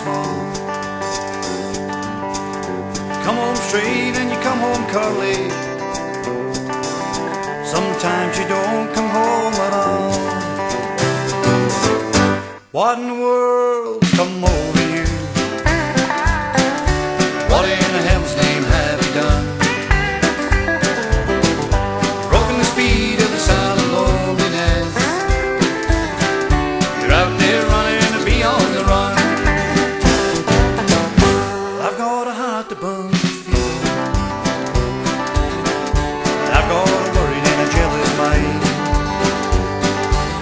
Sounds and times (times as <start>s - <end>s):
Music: 0.0s - 12.8s, 13.9s - 40.4s.